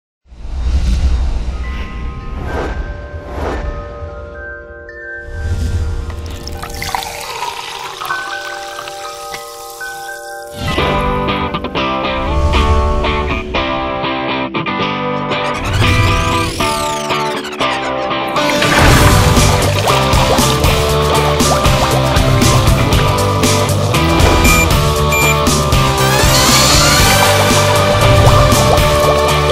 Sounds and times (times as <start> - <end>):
Music: 0.4 - 29.5.